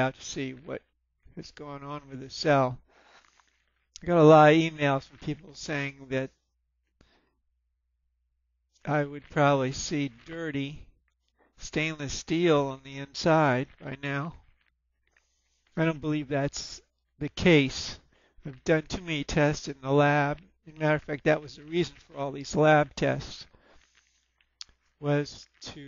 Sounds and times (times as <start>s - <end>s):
Speech: 0.0s - 2.8s, 4.0s - 6.4s, 8.8s - 10.9s, 11.6s - 14.4s, 15.8s - 23.5s, 25.0s - 25.8s.